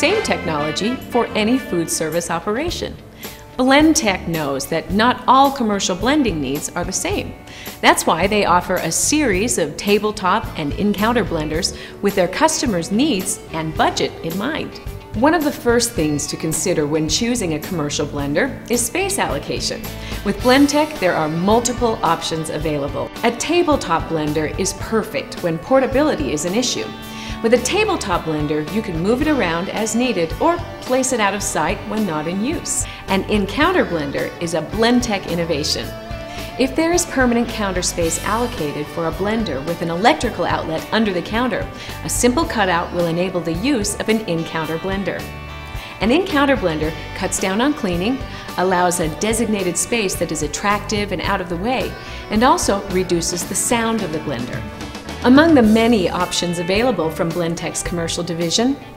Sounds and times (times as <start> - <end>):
Speech: 0.0 - 3.0, 3.6 - 35.9, 36.6 - 45.3, 46.0 - 58.8
Music: 0.0 - 58.9.